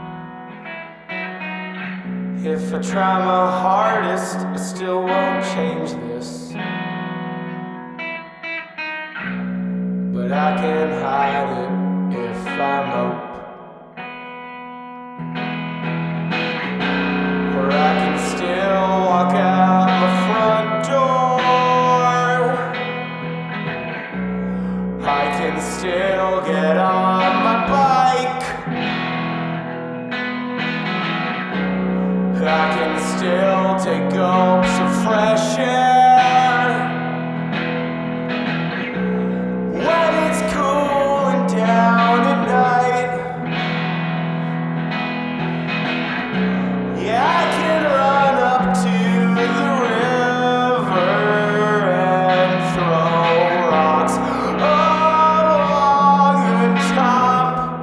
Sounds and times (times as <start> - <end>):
Effects unit: 0.0 - 57.8
Music: 0.0 - 57.8.